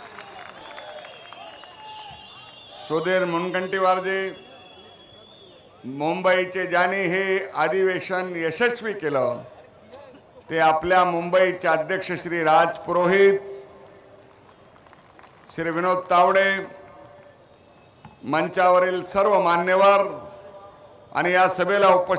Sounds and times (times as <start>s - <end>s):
Male speech, man speaking: 2.8s - 4.5s, 5.8s - 13.5s, 15.6s - 16.8s, 18.2s - 22.1s.